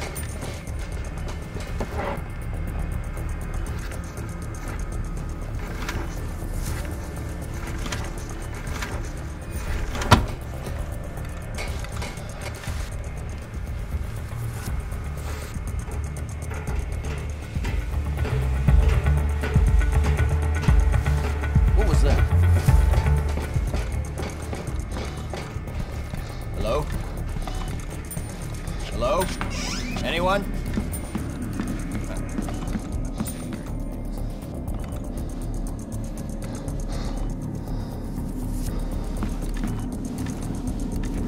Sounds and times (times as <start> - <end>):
Music: 0.0 - 41.2.